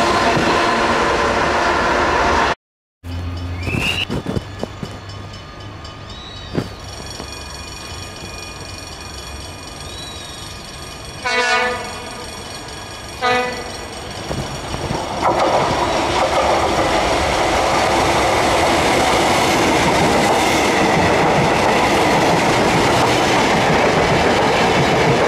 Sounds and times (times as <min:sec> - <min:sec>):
Railroad car, train wagon: 0:00.0 - 0:25.2
Train: 0:00.0 - 0:25.2
Clickety-clack: 0:11.6 - 0:25.2.